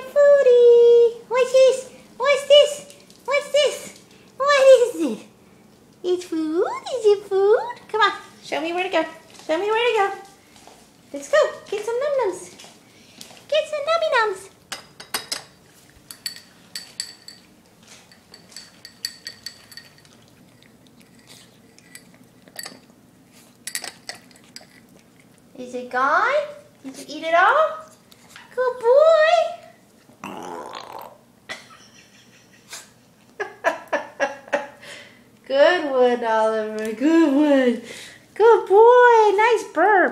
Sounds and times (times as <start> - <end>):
Speech: 0.0 - 5.3, 6.0 - 10.3, 11.1 - 12.6, 13.5 - 14.5, 25.5 - 27.9, 28.5 - 29.7, 35.5 - 40.1.